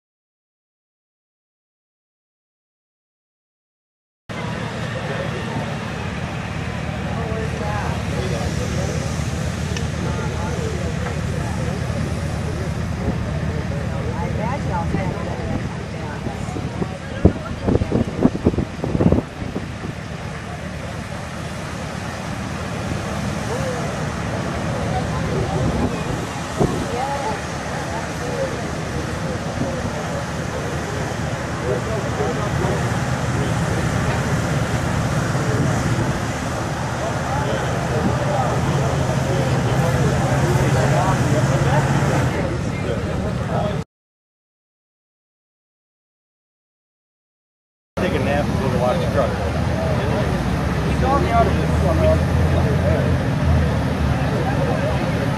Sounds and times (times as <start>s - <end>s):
Truck: 4.3s - 43.8s, 48.0s - 55.3s
Speech: 4.3s - 43.9s, 48.0s - 55.3s.